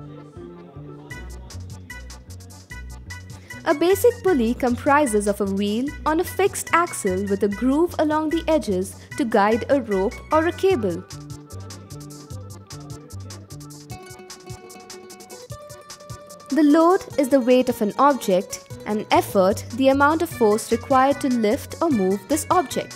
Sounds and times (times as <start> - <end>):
Music: 0.0 - 22.9
Speech: 3.7 - 11.0, 16.5 - 22.9.